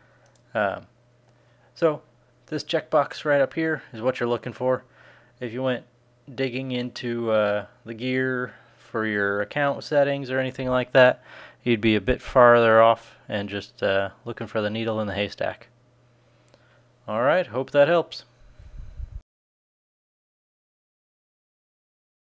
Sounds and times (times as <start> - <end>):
Inside, small room: 0.0 - 19.2
Speech: 0.5 - 0.9, 1.8 - 15.7, 17.1 - 18.3.